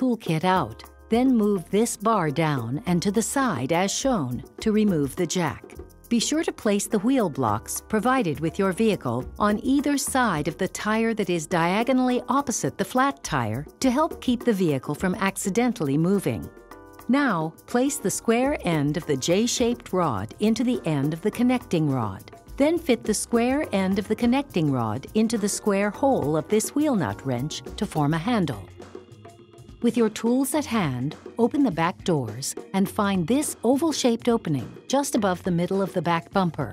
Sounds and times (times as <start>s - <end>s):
Speech: 0.0s - 16.5s, 17.1s - 28.7s, 29.8s - 36.7s
Music: 0.0s - 36.7s.